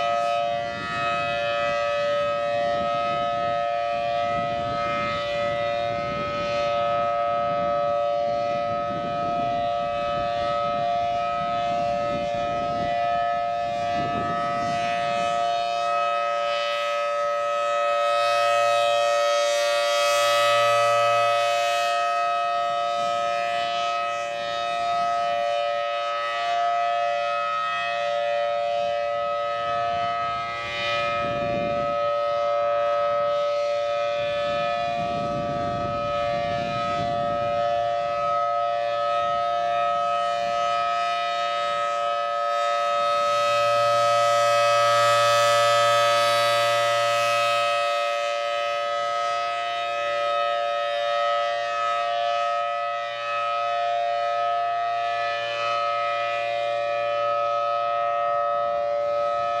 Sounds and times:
Civil defense siren: 0:00.0 - 0:59.6.

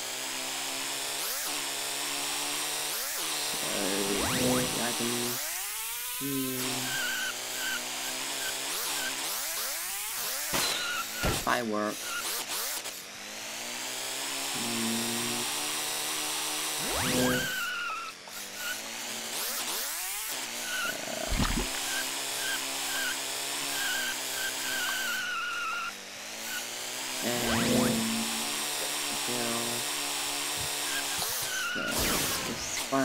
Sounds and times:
Car: 0:00.0 - 0:33.0.

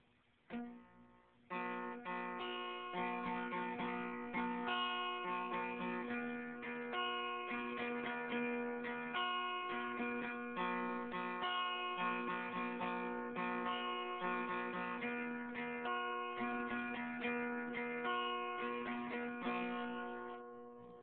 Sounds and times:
Acoustic guitar: 0:00.0 - 0:21.0
Strum: 0:00.5 - 0:21.0.

